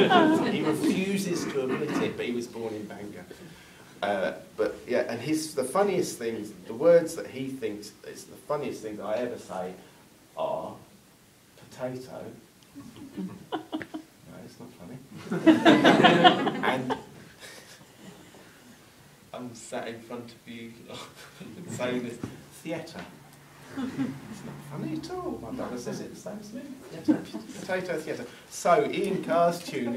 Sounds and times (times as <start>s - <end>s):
Speech: 0.0s - 3.4s, 4.0s - 9.8s, 19.4s - 23.2s, 24.7s - 29.9s.